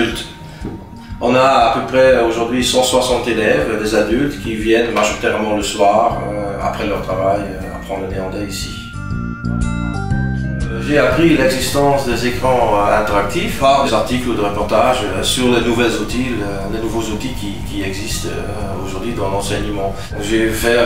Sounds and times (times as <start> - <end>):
Speech: 0.0 - 0.4, 1.2 - 8.9, 10.7 - 20.8
Music: 0.0 - 20.8.